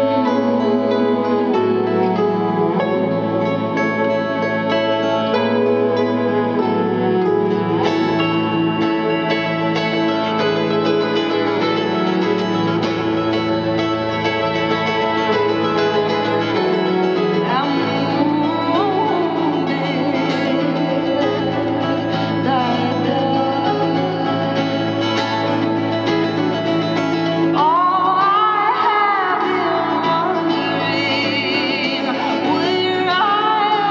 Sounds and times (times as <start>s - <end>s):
Classical music: 0.0s - 19.9s.